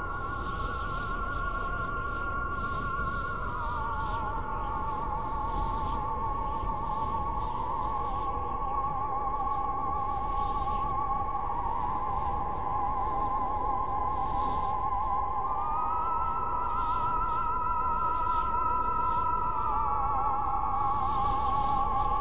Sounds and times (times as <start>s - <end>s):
Music: 0.0s - 22.2s.